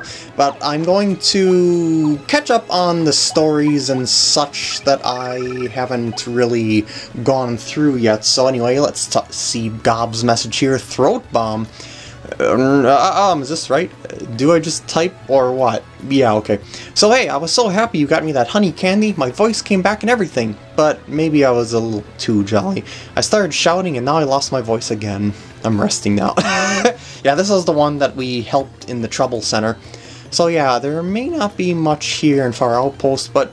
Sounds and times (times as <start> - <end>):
Speech: 0.0 - 11.7, 12.3 - 33.5
Music: 0.0 - 33.5.